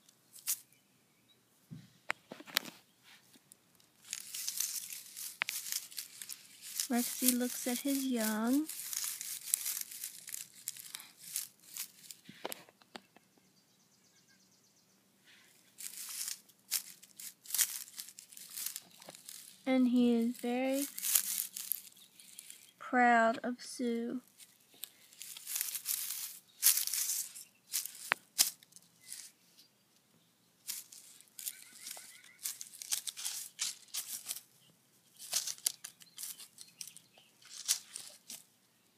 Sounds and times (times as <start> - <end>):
Outside, rural or natural: 0.0 - 38.9
Crumpling, crinkling: 0.4 - 0.6, 3.8 - 12.7, 15.3 - 22.8, 24.2 - 29.4, 30.6 - 34.5, 35.1 - 38.5
Speech: 6.9 - 8.7, 19.7 - 20.9, 22.8 - 24.2.